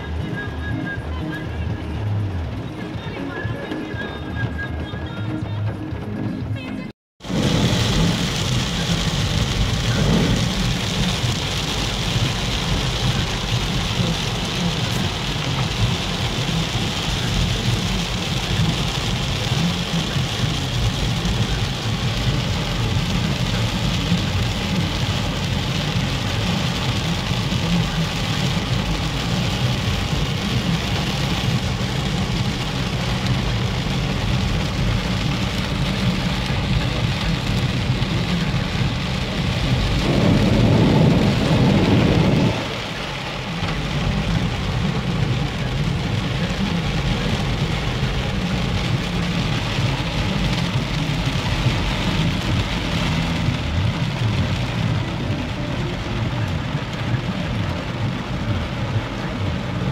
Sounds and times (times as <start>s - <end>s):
Rain: 0.0s - 6.0s, 7.2s - 59.9s
Car: 0.0s - 59.9s.